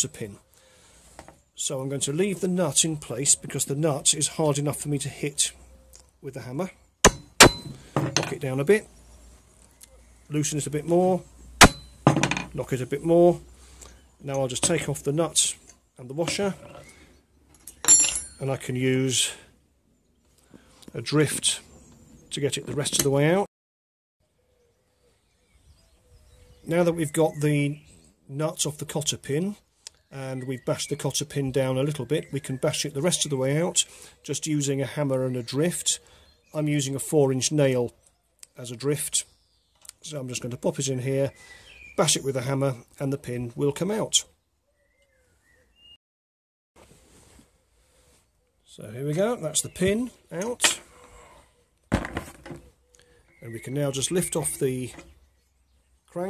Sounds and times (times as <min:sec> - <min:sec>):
Speech: 0:00.0 - 0:00.4, 0:01.6 - 0:05.6, 0:06.2 - 0:06.8, 0:08.2 - 0:08.9, 0:10.3 - 0:11.3, 0:12.5 - 0:13.4, 0:14.2 - 0:16.7, 0:18.4 - 0:19.5, 0:20.9 - 0:21.7, 0:22.3 - 0:23.5, 0:26.6 - 0:39.3, 0:39.9 - 0:41.4, 0:42.0 - 0:44.3, 0:48.7 - 0:50.9, 0:53.4 - 0:55.0.